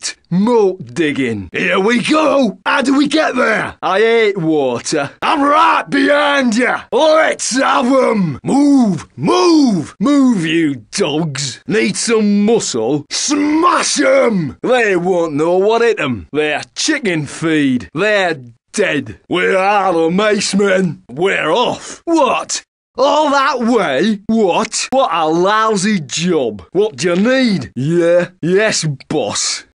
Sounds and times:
Speech: 0:00.0 - 0:29.7.

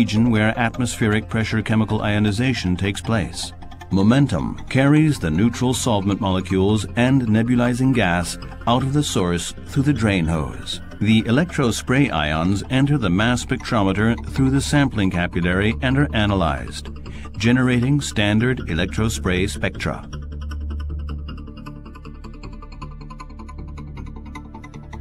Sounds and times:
Music: 0:00.0 - 0:25.0.

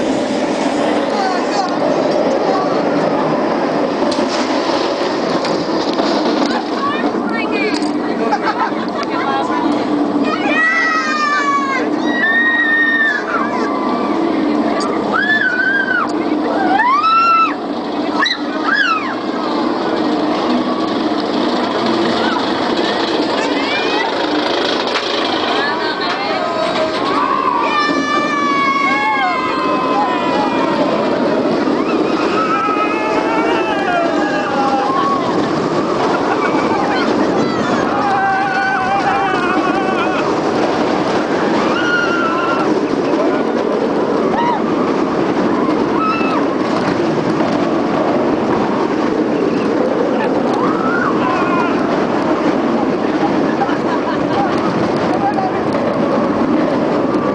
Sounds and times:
Engine: 0:00.0 - 0:57.3.

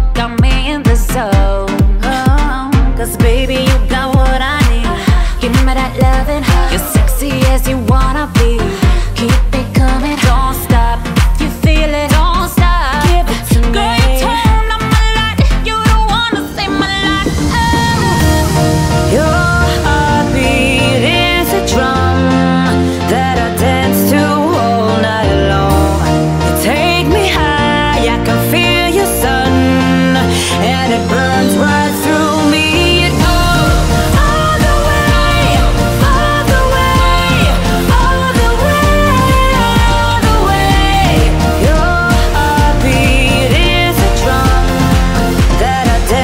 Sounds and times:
Music: 0:00.0 - 0:46.2.

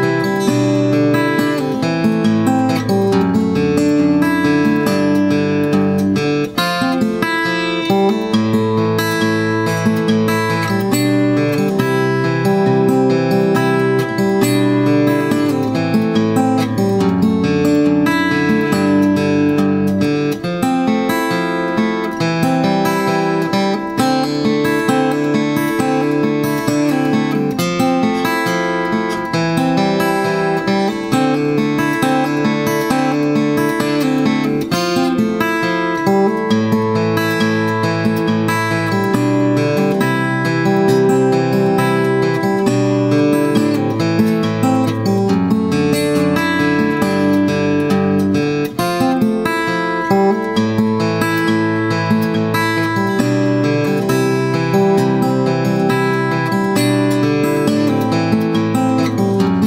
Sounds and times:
Music: 0:00.0 - 0:59.6.

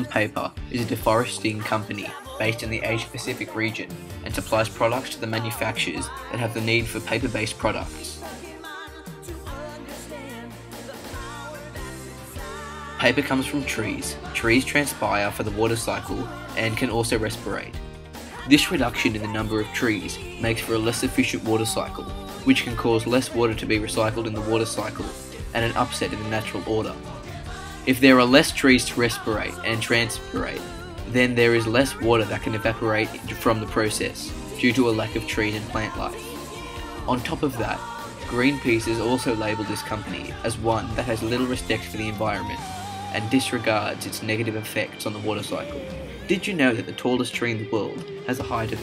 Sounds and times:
Speech: 0:00.0 - 0:08.4, 0:13.0 - 0:17.8, 0:18.4 - 0:27.1, 0:27.9 - 0:48.8
Music: 0:00.0 - 0:48.8.

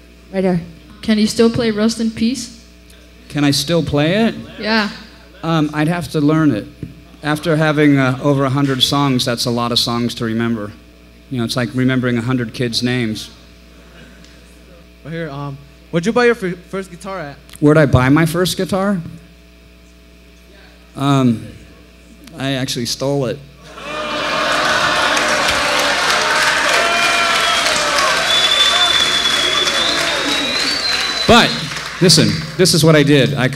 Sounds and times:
Speech: 0:31.3 - 0:33.5.

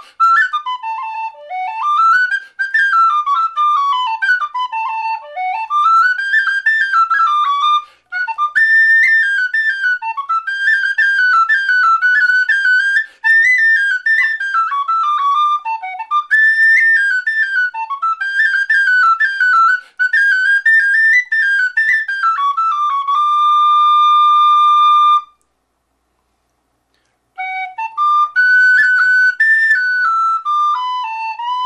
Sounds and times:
Music: 0:00.0 - 0:25.4, 0:27.3 - 0:31.6.

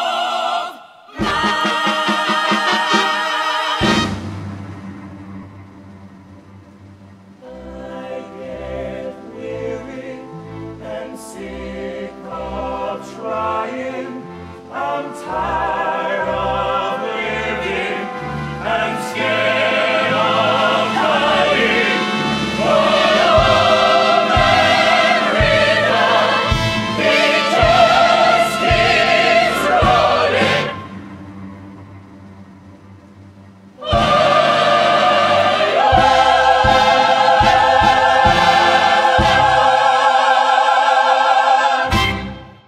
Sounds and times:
Music: 0:00.0 - 0:42.6.

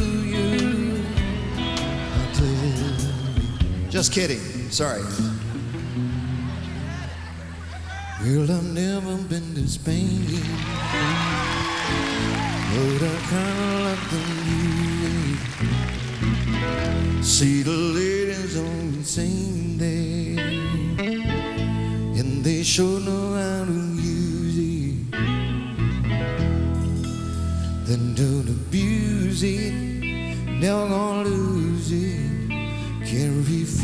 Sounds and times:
Music: 0:00.0 - 0:33.8
Speech: 0:03.9 - 0:05.4, 0:06.5 - 0:09.2.

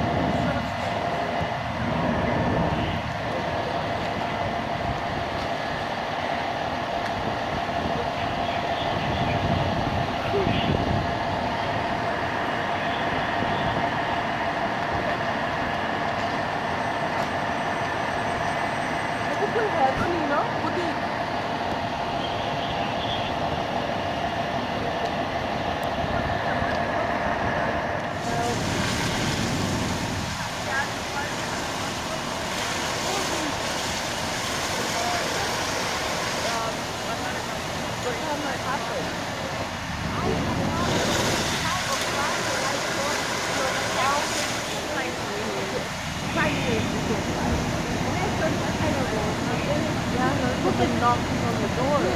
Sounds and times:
Outside, urban or manmade: 0:00.0 - 0:52.1.

